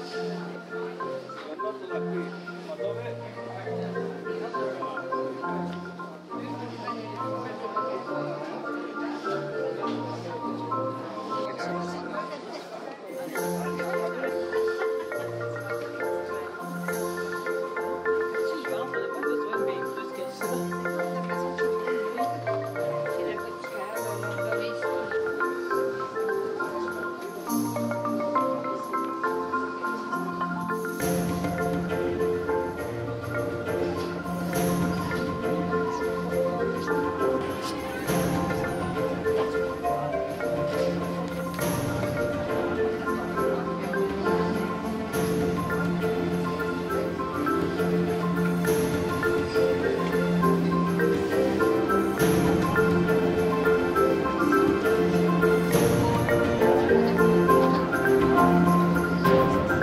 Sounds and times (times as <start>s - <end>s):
Marimba, xylophone: 0.0s - 59.8s
Vibraphone: 0.0s - 59.8s.